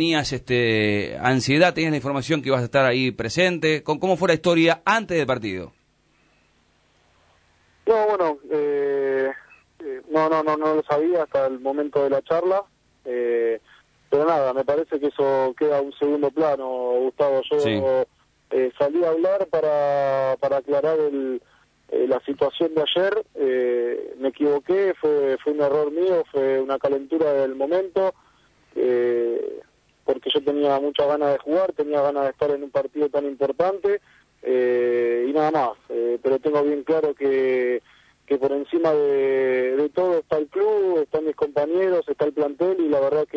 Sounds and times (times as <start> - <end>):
Speech: 0.0 - 5.8, 7.9 - 28.2, 28.8 - 43.3
Radio: 7.9 - 12.6.